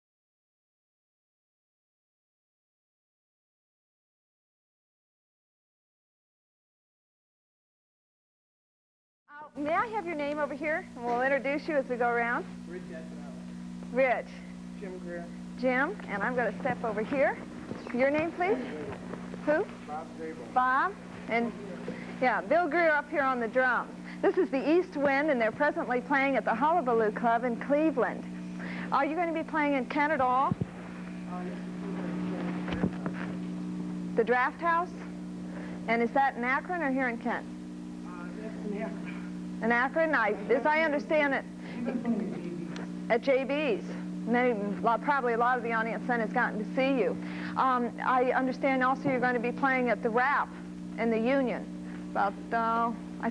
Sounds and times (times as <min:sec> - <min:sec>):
Speech: 0:31.3 - 0:33.2.